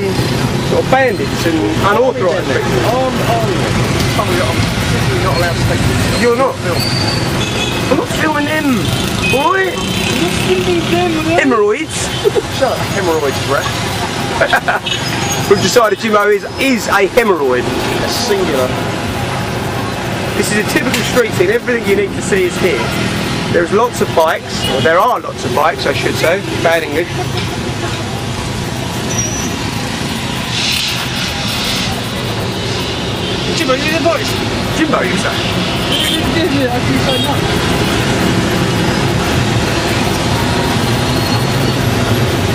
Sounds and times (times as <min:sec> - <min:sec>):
Vehicle: 0:00.0 - 0:42.5.